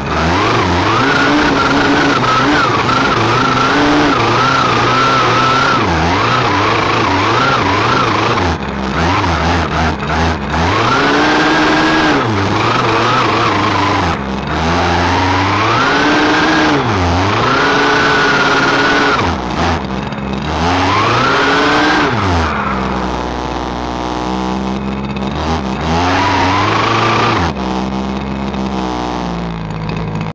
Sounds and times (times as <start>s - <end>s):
Car: 0.0s - 30.3s.